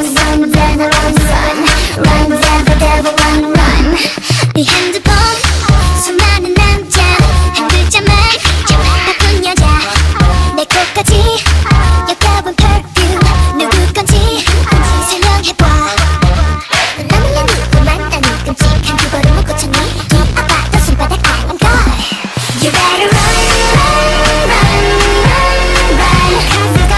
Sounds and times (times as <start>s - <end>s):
Music: 0.0s - 26.9s.